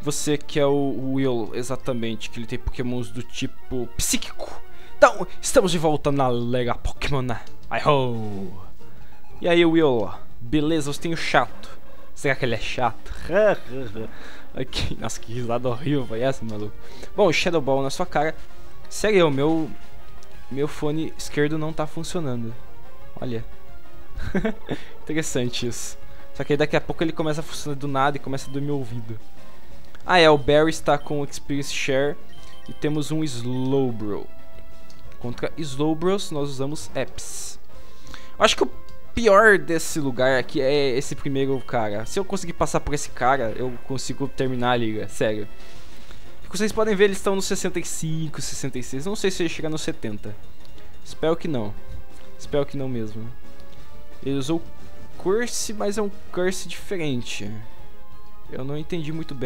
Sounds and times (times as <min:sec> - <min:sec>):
Speech: 0:00.0 - 0:08.7, 0:09.4 - 0:11.6, 0:12.2 - 0:19.8, 0:20.5 - 0:22.6, 0:23.2 - 0:23.5, 0:25.1 - 0:29.2, 0:30.1 - 0:34.3, 0:35.2 - 0:37.6, 0:38.4 - 0:45.5, 0:46.5 - 0:50.4, 0:51.1 - 0:51.8, 0:52.4 - 0:53.3, 0:54.2 - 0:57.6, 0:58.5 - 0:59.4
Music: 0:00.0 - 0:59.4.